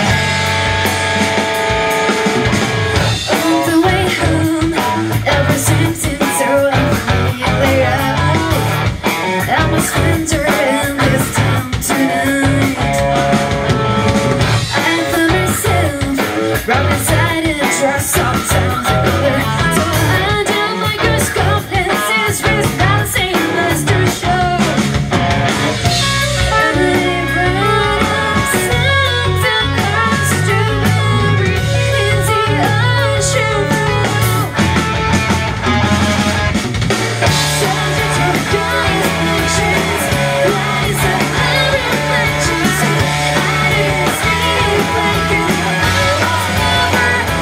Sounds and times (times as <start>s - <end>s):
Music: 0.0s - 47.4s.